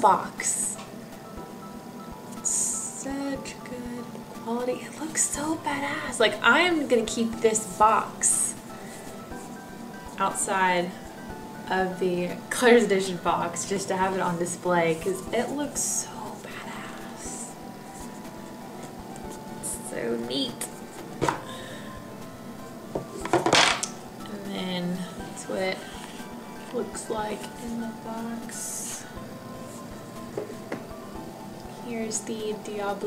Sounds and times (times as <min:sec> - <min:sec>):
Inside, small room: 0:00.0 - 0:33.0
Music: 0:00.0 - 0:33.0
Speech: 0:02.5 - 0:08.6, 0:11.7 - 0:16.6, 0:19.7 - 0:20.7, 0:31.9 - 0:33.0.